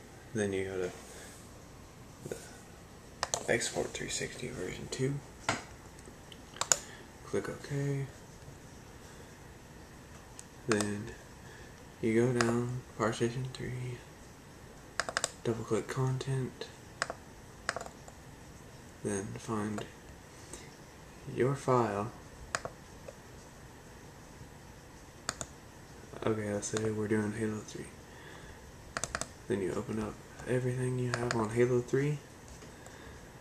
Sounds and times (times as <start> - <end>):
Computer keyboard: 15.0 - 15.4, 17.0 - 18.0, 25.3 - 25.5, 29.0 - 29.3.